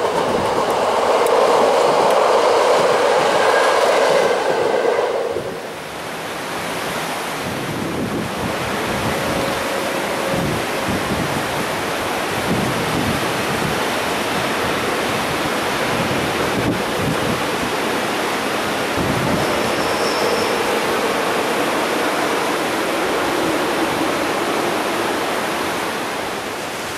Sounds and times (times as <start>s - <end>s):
Train: 0.0s - 26.9s.